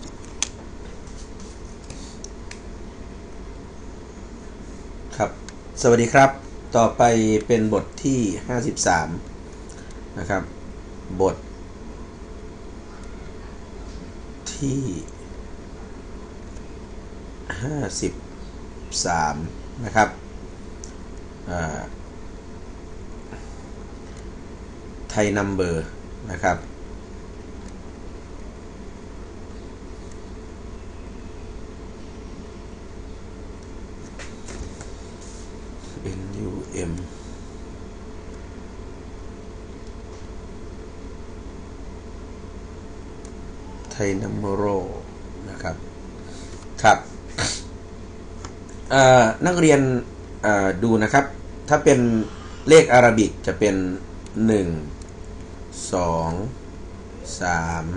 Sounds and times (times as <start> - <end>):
Speech: 5.2 - 9.2, 10.2 - 10.5, 11.1 - 11.4, 14.5 - 15.1, 17.5 - 18.2, 18.9 - 20.2, 21.5 - 21.9, 25.1 - 26.6, 36.0 - 37.1, 43.9 - 45.8, 46.8 - 47.5, 48.9 - 55.0, 55.8 - 56.6, 57.2 - 57.9.